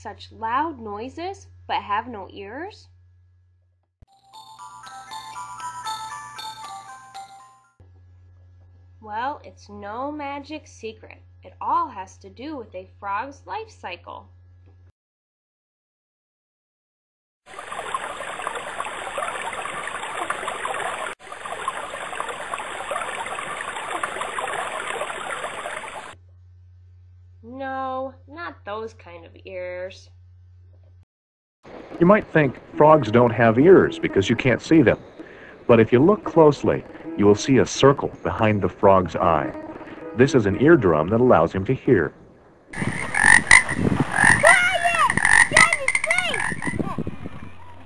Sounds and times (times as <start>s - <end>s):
Speech: 0.0s - 2.9s, 9.0s - 14.3s, 27.4s - 30.1s, 32.0s - 35.0s, 35.7s - 39.6s, 40.2s - 42.2s
Music: 4.1s - 8.0s, 32.0s - 41.6s.